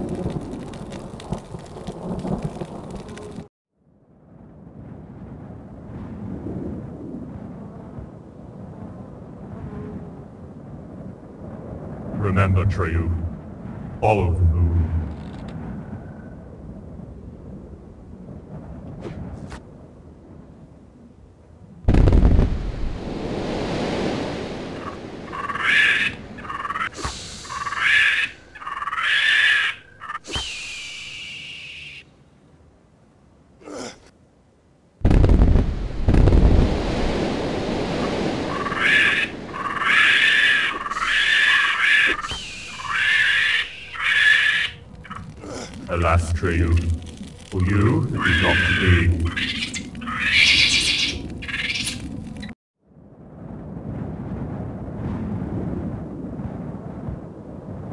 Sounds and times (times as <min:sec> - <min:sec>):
Outside, rural or natural: 0:00.0 - 0:57.9.